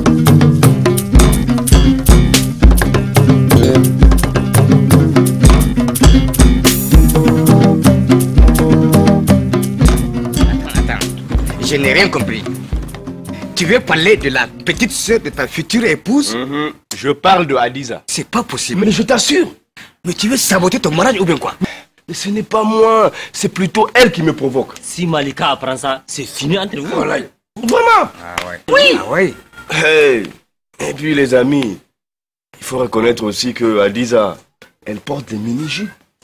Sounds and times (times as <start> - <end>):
Speech: 3.5 - 3.8, 10.4 - 12.5, 13.6 - 31.9, 32.6 - 36.0.